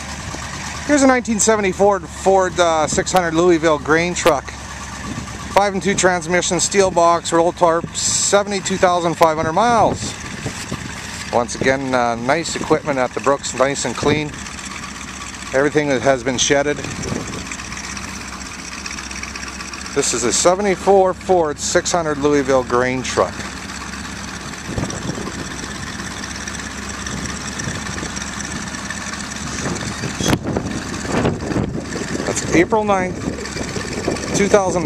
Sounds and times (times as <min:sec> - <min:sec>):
Truck: 0:00.0 - 0:34.8
Speech: 0:00.9 - 0:04.6, 0:05.6 - 0:10.2, 0:11.3 - 0:14.4, 0:15.5 - 0:16.9, 0:20.0 - 0:23.4, 0:32.3 - 0:33.2, 0:34.3 - 0:34.8.